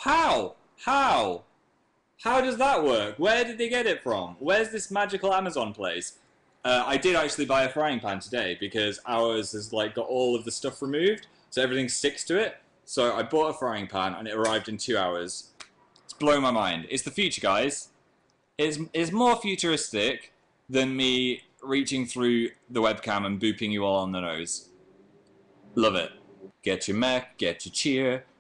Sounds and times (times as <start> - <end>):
Speech: 0.0 - 1.5, 2.2 - 17.9, 18.6 - 24.7, 25.8 - 28.3.